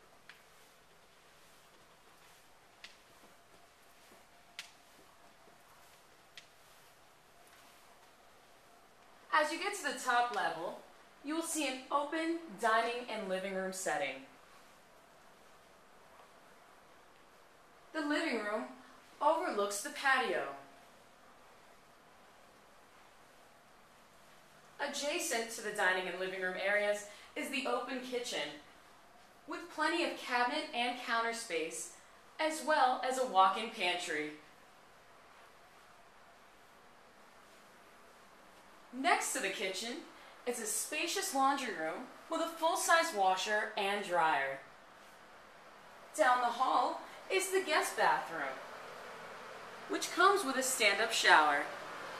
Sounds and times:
Speech: 0:09.3 - 0:14.3, 0:18.0 - 0:20.7, 0:24.8 - 0:28.7, 0:29.5 - 0:34.4, 0:38.9 - 0:44.7, 0:46.1 - 0:48.6, 0:49.9 - 0:51.8.

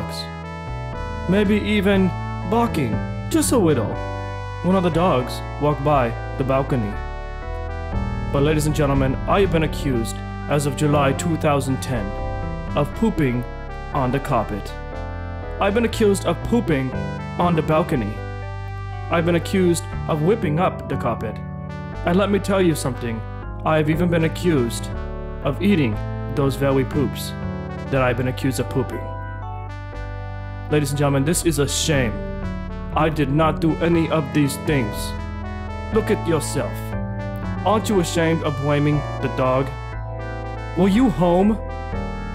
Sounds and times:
Speech: 0:00.0 - 0:00.3, 0:01.3 - 0:04.0, 0:04.6 - 0:07.0, 0:08.4 - 0:12.1, 0:12.8 - 0:14.8, 0:15.6 - 0:18.2, 0:19.1 - 0:21.4, 0:22.1 - 0:27.4, 0:28.0 - 0:29.1, 0:30.7 - 0:32.2, 0:33.0 - 0:35.2, 0:36.0 - 0:36.9, 0:37.7 - 0:39.8, 0:40.8 - 0:41.6
Music: 0:00.0 - 0:42.3.

